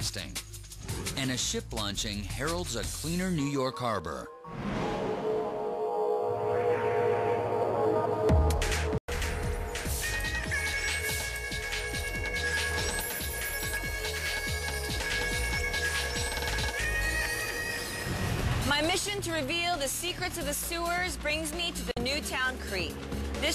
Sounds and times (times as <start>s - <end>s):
Music: 0.0s - 23.5s
Speech: 1.2s - 4.3s, 18.7s - 23.5s.